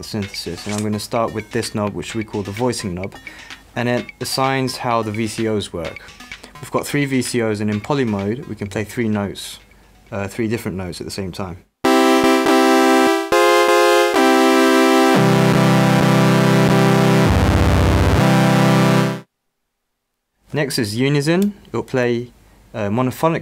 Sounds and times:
Speech: 0:00.0 - 0:03.2, 0:03.8 - 0:06.0, 0:06.6 - 0:11.7, 0:20.5 - 0:23.4
Music: 0:00.0 - 0:10.5, 0:11.8 - 0:19.3.

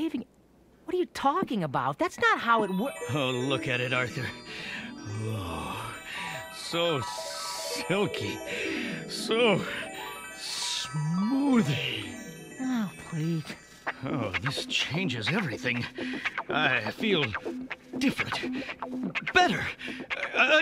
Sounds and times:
Music: 0:02.4 - 0:20.6
Speech: 0:12.6 - 0:15.9, 0:16.5 - 0:17.4, 0:18.0 - 0:18.5, 0:19.3 - 0:20.6.

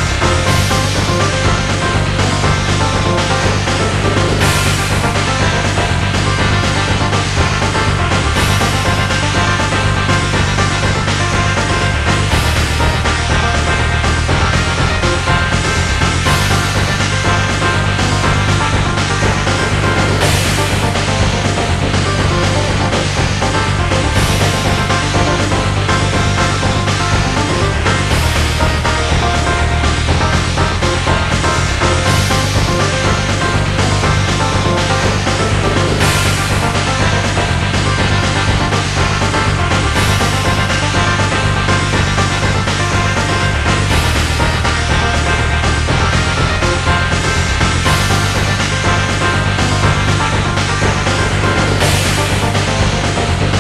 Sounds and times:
Music: 0:00.0 - 0:53.6.

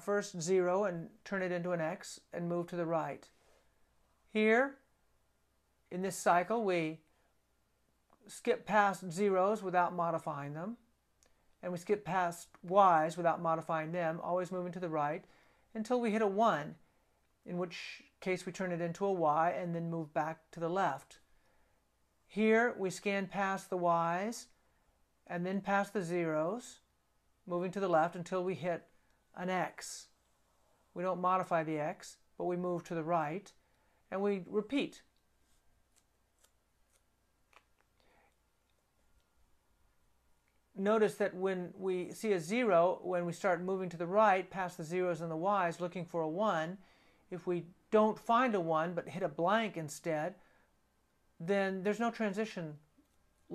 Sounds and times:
Speech: 0:00.0 - 0:03.3, 0:04.3 - 0:04.8, 0:05.9 - 0:07.1, 0:08.2 - 0:10.9, 0:11.6 - 0:16.8, 0:17.4 - 0:21.2, 0:22.3 - 0:24.5, 0:25.3 - 0:26.8, 0:27.5 - 0:30.1, 0:31.0 - 0:35.1, 0:40.8 - 0:50.4, 0:51.4 - 0:52.9
Inside, small room: 0:00.0 - 0:53.5.

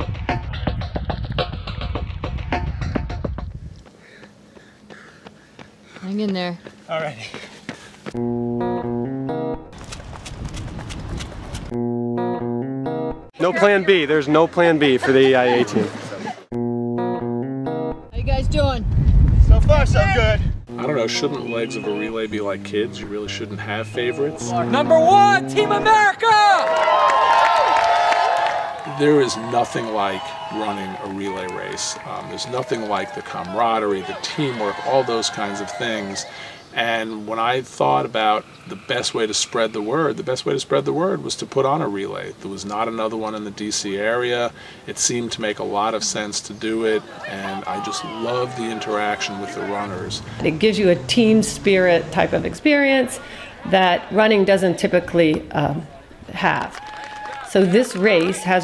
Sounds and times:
Music: 0:00.0 - 0:03.6, 0:08.2 - 0:09.8, 0:11.8 - 0:13.3, 0:16.6 - 0:18.6, 0:20.7 - 0:26.0
Outside, urban or manmade: 0:00.0 - 0:58.6
Run: 0:02.8 - 0:08.2, 0:09.8 - 0:11.7, 0:26.6 - 0:36.3, 0:56.7 - 0:58.6
Speech: 0:29.0 - 0:55.8.

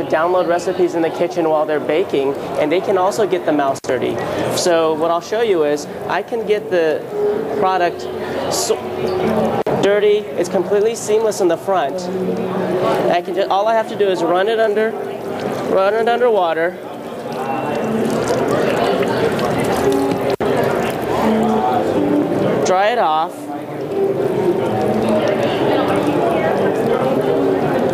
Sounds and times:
Speech: 0:00.0 - 0:07.0, 0:07.6 - 0:17.9
Music: 0:05.8 - 0:16.0, 0:16.8 - 0:27.9.

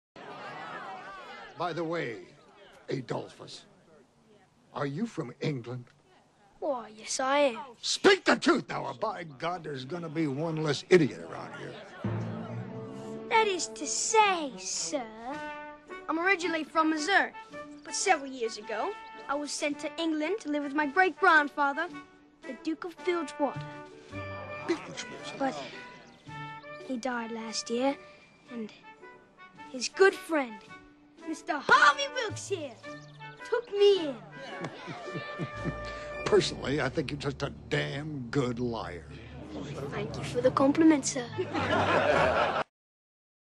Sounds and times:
Music: 0:08.6 - 0:42.6.

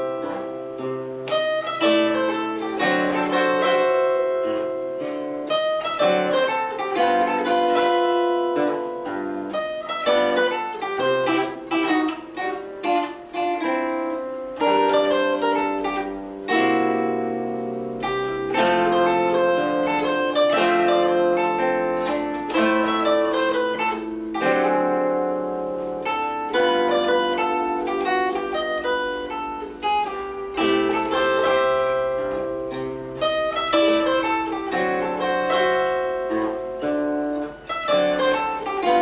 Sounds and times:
Pizzicato: 0:00.0 - 0:39.0
Zither: 0:00.0 - 0:39.0.

